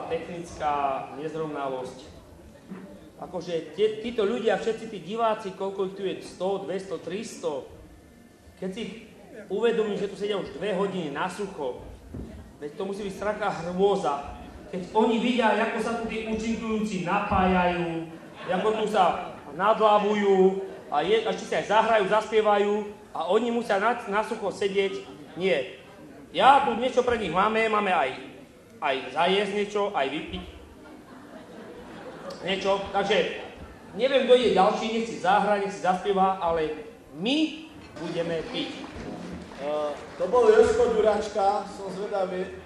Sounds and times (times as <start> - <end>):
Male speech, man speaking: 0.0 - 2.2, 3.2 - 7.8, 8.6 - 11.9, 12.6 - 30.6, 32.3 - 38.9, 39.6 - 42.6.